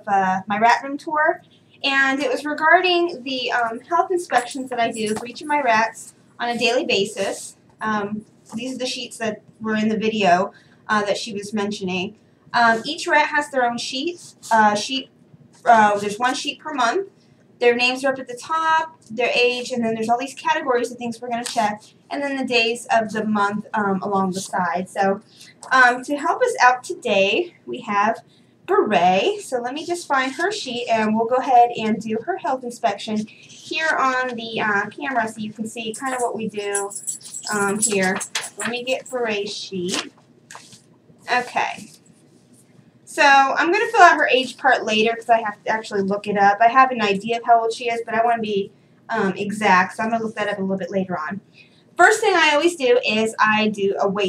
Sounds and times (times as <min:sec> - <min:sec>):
Speech: 0:00.0 - 0:40.1, 0:41.3 - 0:42.0, 0:43.1 - 0:54.2.